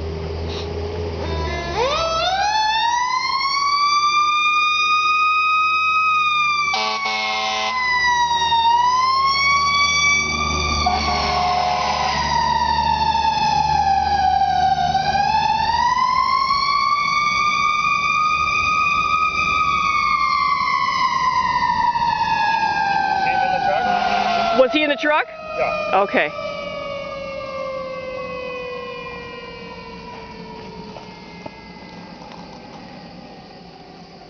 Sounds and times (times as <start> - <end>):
Truck: 0.0 - 34.2
Speech: 24.6 - 26.4.